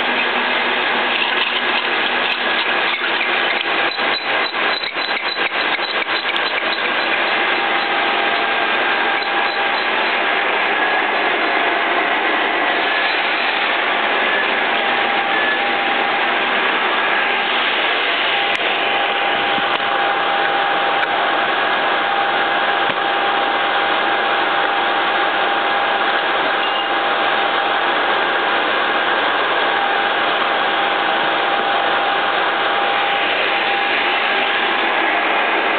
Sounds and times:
Tools: 1.1 - 7.2.

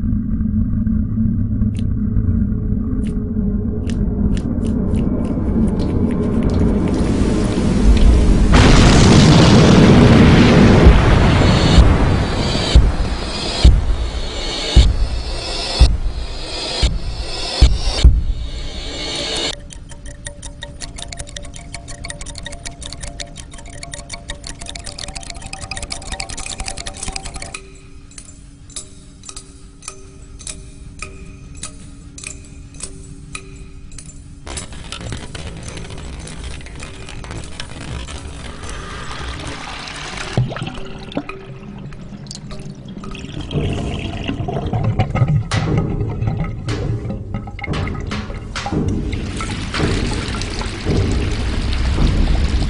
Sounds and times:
Music: 3.0 - 52.7
Boom: 8.2 - 15.2.

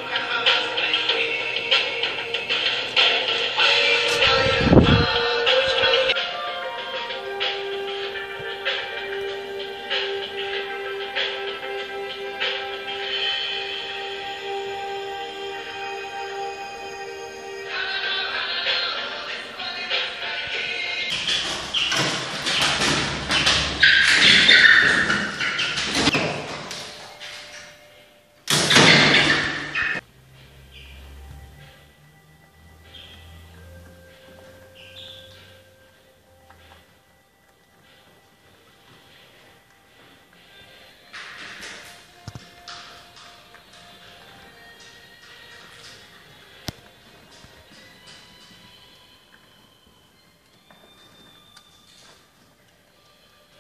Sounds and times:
Music: 0.0 - 53.6
Bird: 21.1 - 26.2, 34.1 - 35.6.

